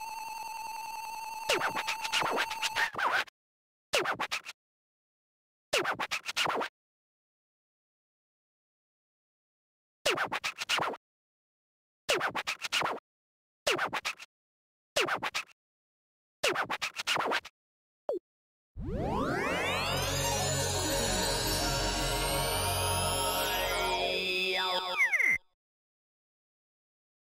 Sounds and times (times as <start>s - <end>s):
Music: 18.9s - 25.0s.